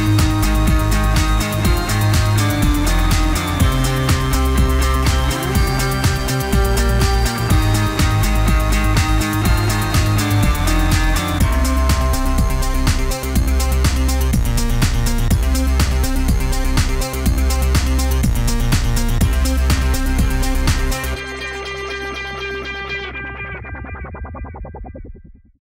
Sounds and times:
Music: 0:00.0 - 0:25.6.

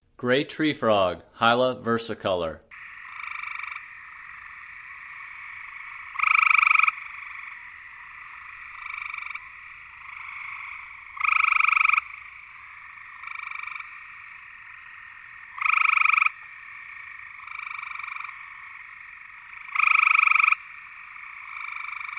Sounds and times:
Frog: 0:02.7 - 0:22.1.

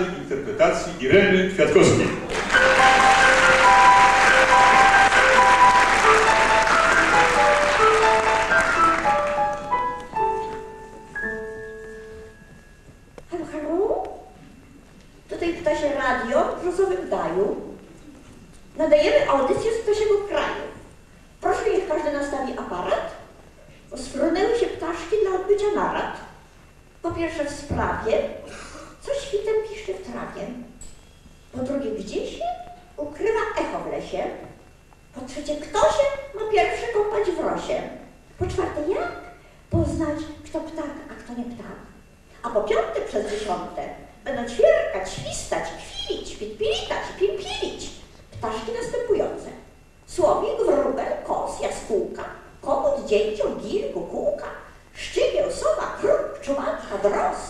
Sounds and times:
Music: 0:02.4 - 0:13.2.

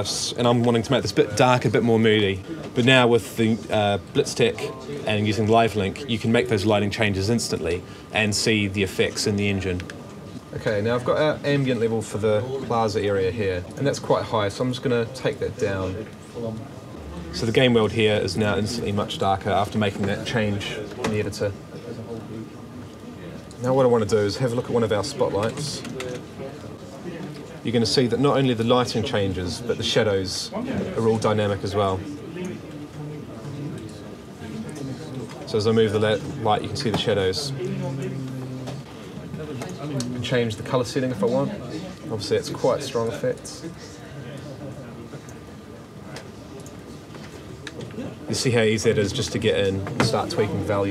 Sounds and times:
Speech: 0:00.0 - 0:46.4, 0:47.9 - 0:50.9.

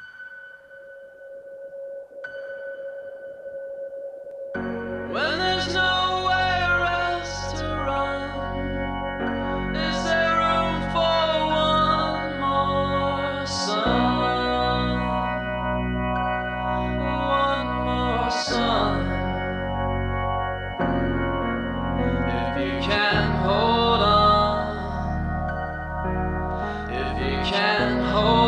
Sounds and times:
Chorus effect: 0:00.0 - 0:28.4.

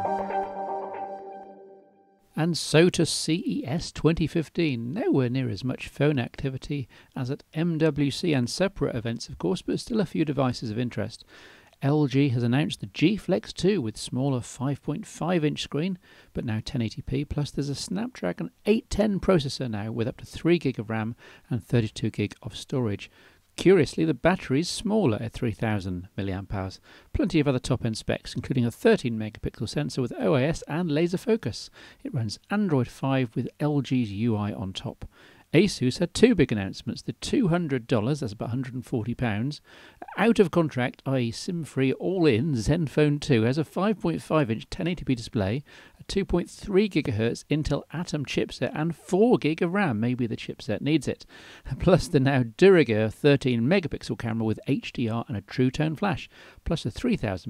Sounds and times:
Speech: 0:02.4 - 0:57.5.

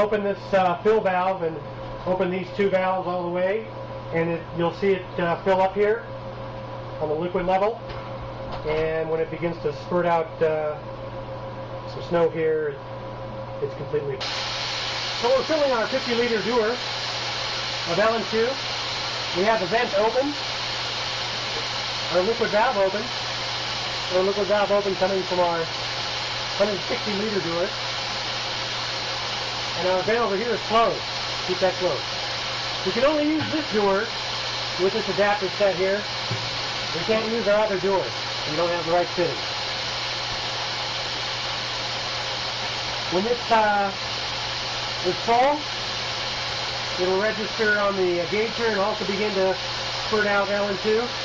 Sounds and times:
Speech: 0:00.0 - 0:06.1, 0:07.0 - 0:07.8, 0:08.6 - 0:10.8, 0:11.9 - 0:12.8, 0:13.6 - 0:14.2, 0:15.2 - 0:16.8, 0:17.9 - 0:18.6, 0:19.4 - 0:20.4, 0:22.1 - 0:23.1, 0:24.1 - 0:25.7, 0:26.6 - 0:27.7, 0:29.8 - 0:32.0, 0:32.9 - 0:34.1, 0:34.8 - 0:36.1, 0:37.0 - 0:39.4, 0:43.1 - 0:44.0, 0:45.0 - 0:45.7, 0:47.0 - 0:51.2.

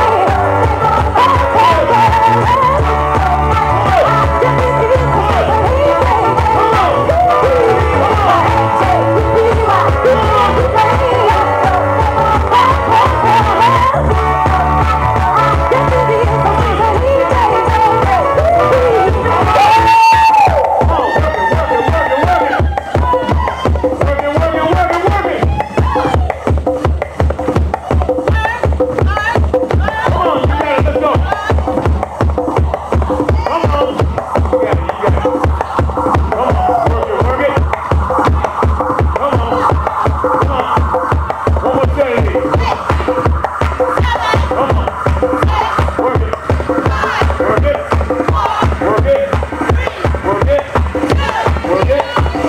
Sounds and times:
Music: 0:00.0 - 0:52.4.

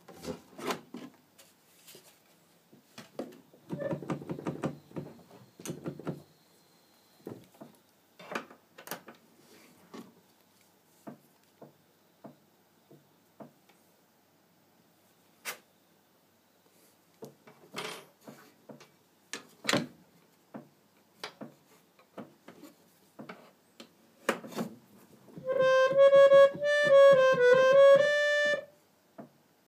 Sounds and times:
Piano: 0:25.4 - 0:28.8.

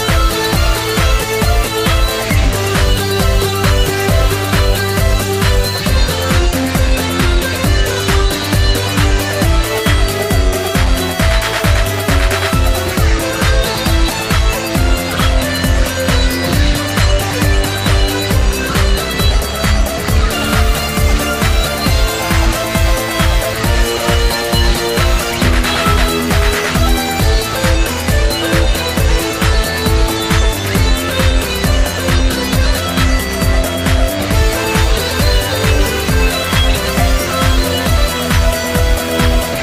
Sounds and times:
Techno: 0:00.0 - 0:39.6.

